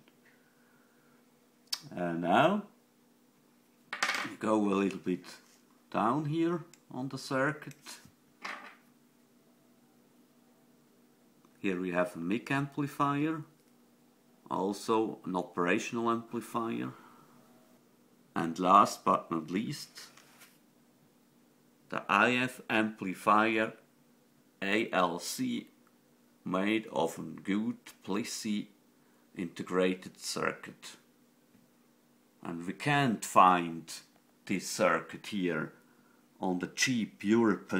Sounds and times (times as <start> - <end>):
Speech: 1.8 - 2.8, 4.2 - 8.1, 11.6 - 13.5, 14.4 - 17.0, 18.4 - 20.2, 21.9 - 23.8, 24.6 - 25.8, 26.4 - 28.8, 29.4 - 31.1, 32.4 - 35.8, 36.4 - 37.7.